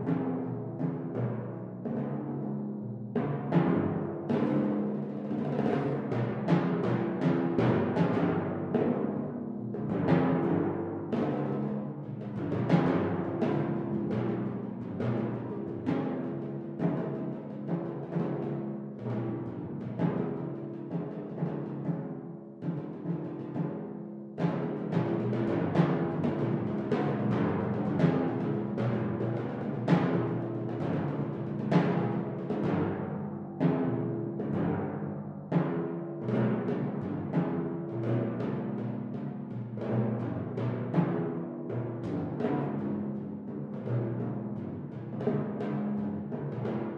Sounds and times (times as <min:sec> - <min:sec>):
Snare drum: 0:03.2 - 0:46.9.